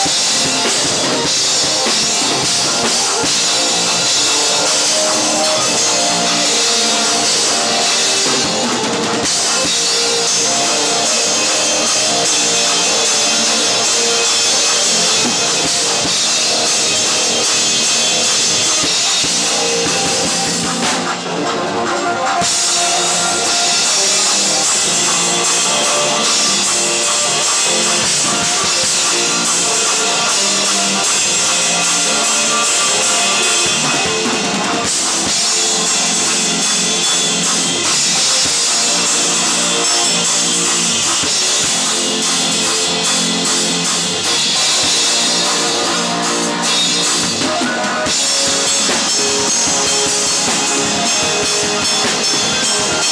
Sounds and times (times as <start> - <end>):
Music: 0.0 - 53.1.